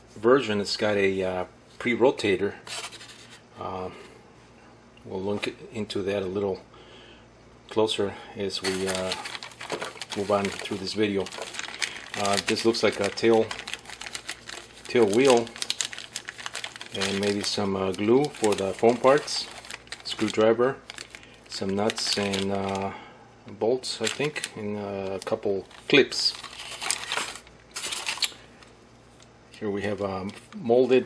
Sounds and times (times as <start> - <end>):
Speech: 0.2 - 2.6, 3.6 - 4.0, 5.0 - 6.7, 7.7 - 9.2, 10.1 - 11.4, 12.2 - 13.6, 14.9 - 15.6, 16.9 - 20.8, 21.5 - 26.4, 29.6 - 31.0.